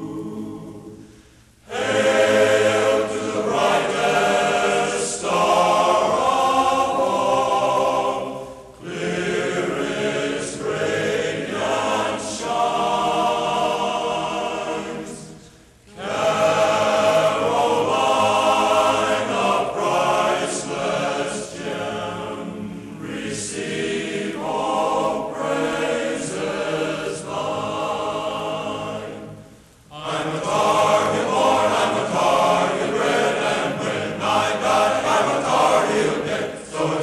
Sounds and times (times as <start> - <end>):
Music: 0.0 - 37.0.